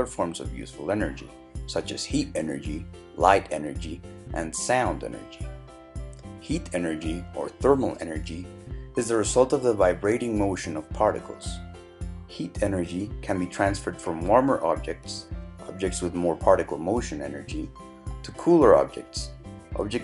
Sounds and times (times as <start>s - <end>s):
Speech: 0.0s - 5.4s, 6.4s - 11.6s, 12.3s - 17.7s, 18.3s - 20.0s
Music: 0.0s - 20.0s.